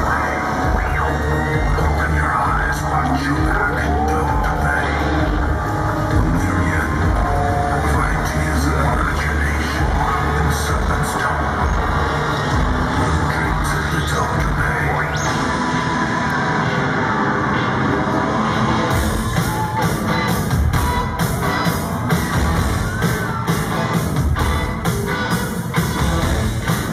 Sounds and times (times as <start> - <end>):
Speech: 0.0 - 5.4, 6.2 - 11.7, 13.2 - 15.3
Music: 0.0 - 26.9.